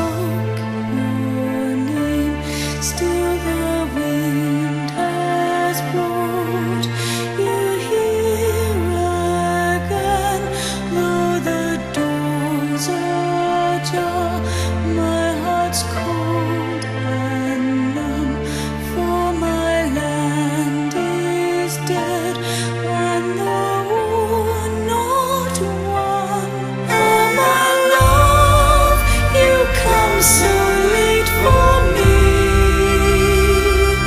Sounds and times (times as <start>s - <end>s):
Music: 0.0s - 34.0s.